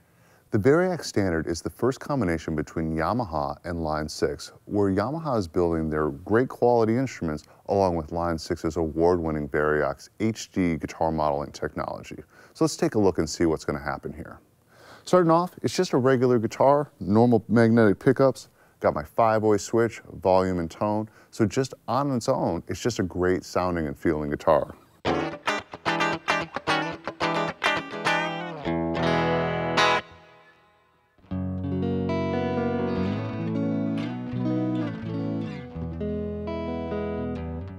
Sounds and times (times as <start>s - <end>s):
Speech: 0.5s - 14.4s, 15.1s - 24.8s.